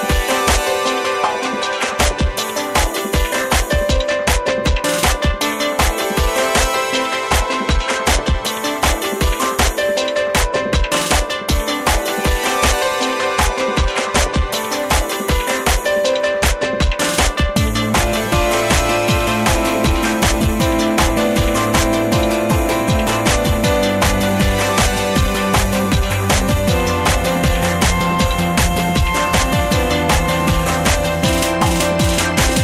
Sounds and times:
Background music: 0:00.0 - 0:32.6.

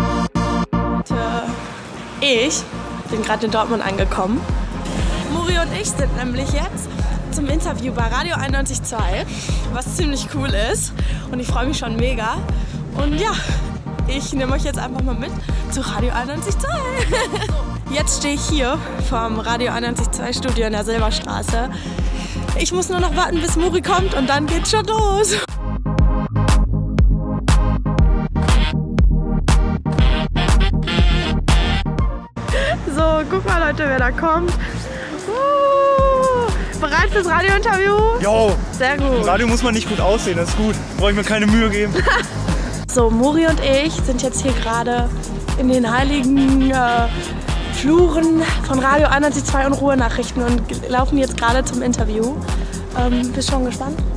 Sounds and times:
Music: 0:00.0 - 0:54.1.

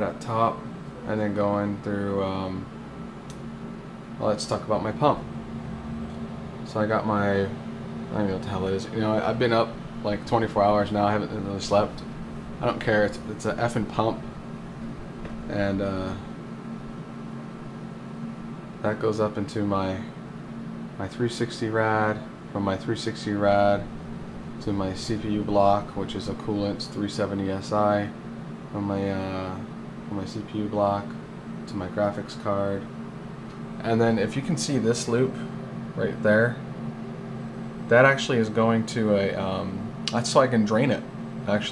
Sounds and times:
Speech: 0:00.0 - 0:02.7, 0:04.2 - 0:05.3, 0:06.6 - 0:14.3, 0:15.5 - 0:16.3, 0:18.8 - 0:20.2, 0:21.0 - 0:23.9, 0:24.6 - 0:32.9, 0:33.8 - 0:36.7, 0:37.9 - 0:41.7.

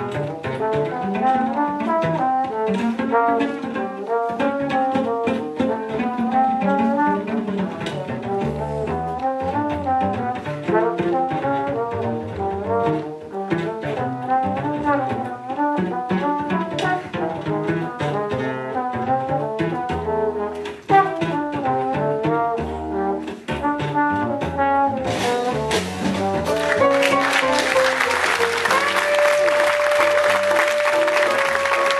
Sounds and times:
Double bass: 0:00.0 - 0:31.9
Trombone: 0:00.0 - 0:31.9.

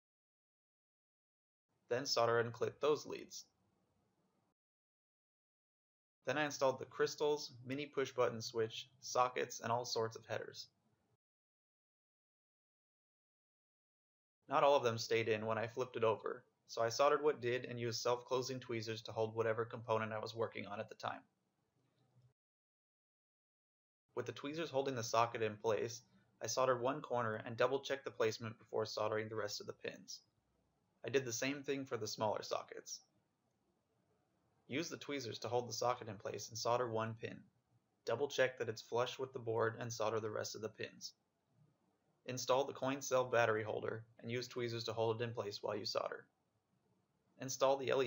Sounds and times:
Speech: 0:01.9 - 0:03.5, 0:06.3 - 0:10.7, 0:14.5 - 0:21.3, 0:24.2 - 0:30.2, 0:31.0 - 0:33.0, 0:34.7 - 0:37.4, 0:38.1 - 0:41.2, 0:42.3 - 0:46.3, 0:47.4 - 0:48.0.

